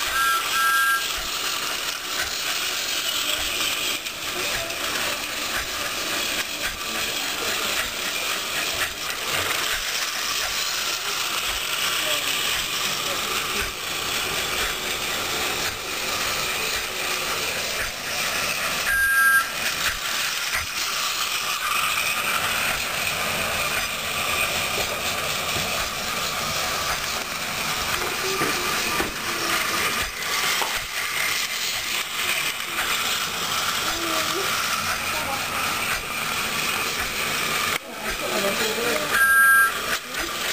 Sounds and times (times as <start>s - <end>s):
Train: 0.0s - 40.5s
Speech: 3.1s - 8.0s, 11.9s - 13.8s, 33.8s - 35.9s, 37.8s - 39.2s, 39.9s - 40.5s.